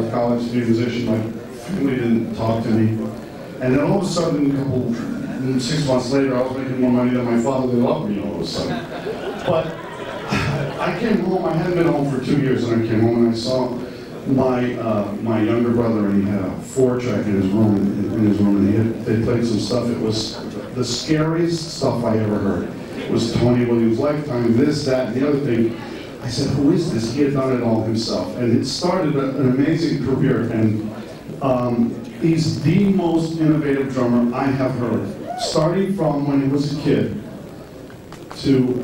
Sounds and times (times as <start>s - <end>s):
Speech: 0.0s - 37.4s, 38.3s - 38.8s.